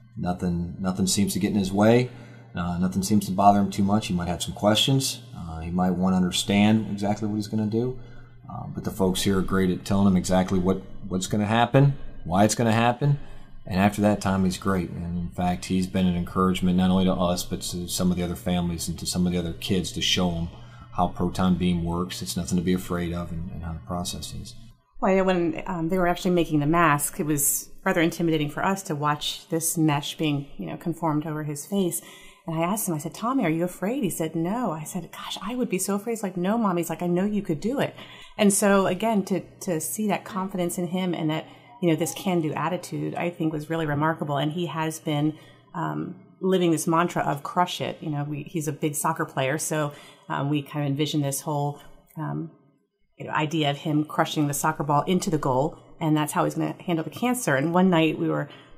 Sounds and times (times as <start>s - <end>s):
Speech: 0.2s - 52.5s, 53.2s - 58.5s.